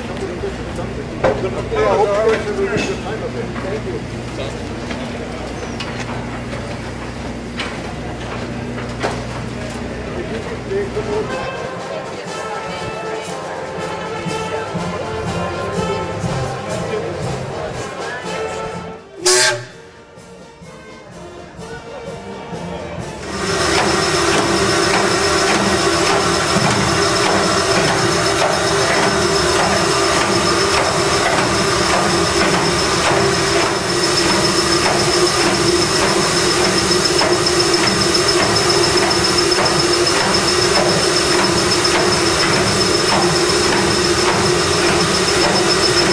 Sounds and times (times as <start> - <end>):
Music: 10.7 - 23.3.